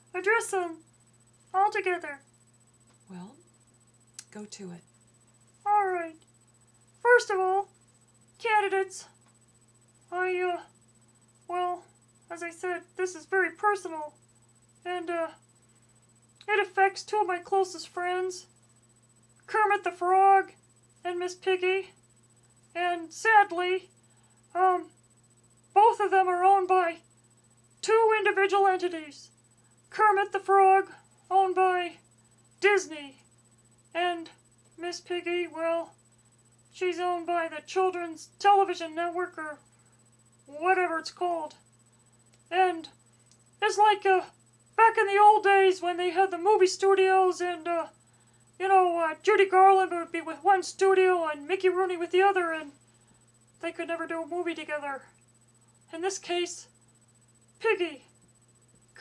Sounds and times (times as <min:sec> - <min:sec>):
Speech: 0:05.6 - 0:06.2, 0:07.0 - 0:07.7, 0:10.1 - 0:10.7, 0:11.5 - 0:14.2, 0:14.8 - 0:15.4, 0:16.4 - 0:18.5, 0:19.5 - 0:22.0, 0:22.8 - 0:23.9, 0:25.8 - 0:27.0, 0:29.9 - 0:32.0, 0:32.6 - 0:33.2, 0:33.9 - 0:35.9, 0:36.8 - 0:39.6, 0:40.5 - 0:41.6, 0:42.5 - 0:43.0, 0:43.6 - 0:48.0, 0:48.6 - 0:52.8, 0:53.6 - 0:55.1, 0:55.9 - 0:56.7, 0:57.6 - 0:58.1.